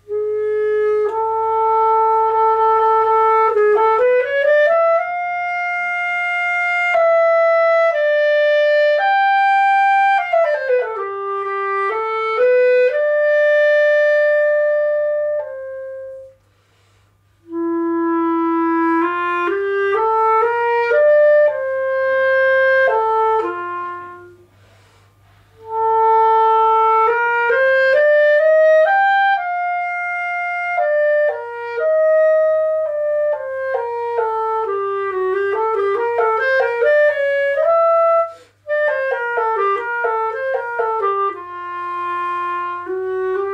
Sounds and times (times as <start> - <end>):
Clarinet: 0.0 - 43.5.